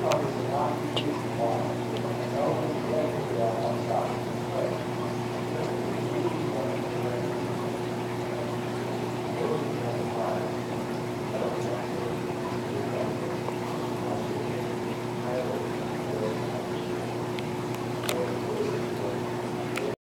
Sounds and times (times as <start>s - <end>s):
Speech: 0.0s - 17.0s, 18.1s - 20.0s.